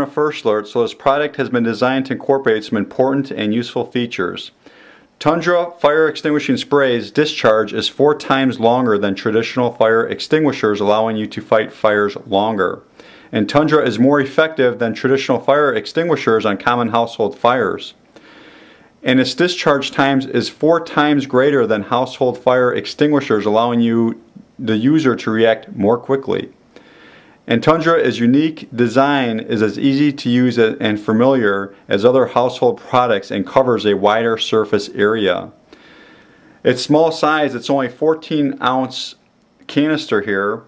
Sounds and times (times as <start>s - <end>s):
Speech: 0.0s - 4.6s, 5.2s - 18.0s, 19.0s - 26.6s, 27.5s - 35.6s, 36.6s - 40.6s.